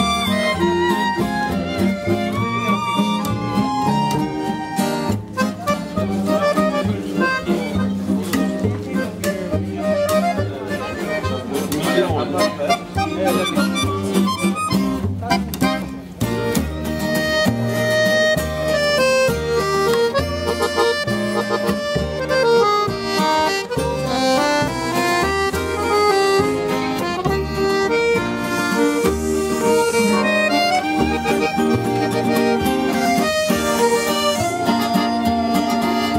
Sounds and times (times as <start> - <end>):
Violin, fiddle: 0.0 - 8.8, 17.0 - 36.1
Guitar: 0.0 - 36.1.